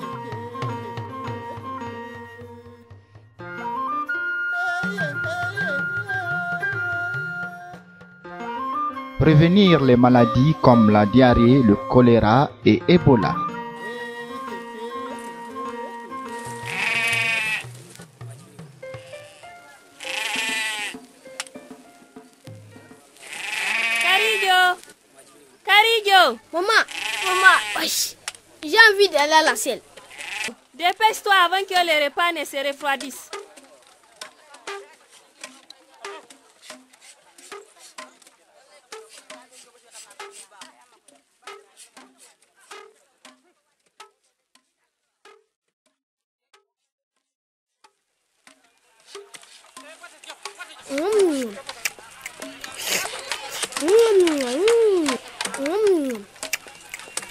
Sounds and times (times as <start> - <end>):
Music: 0.0 - 27.9, 31.1 - 44.2, 48.4 - 57.3
Speech: 24.0 - 29.8, 30.8 - 33.5, 49.8 - 56.3.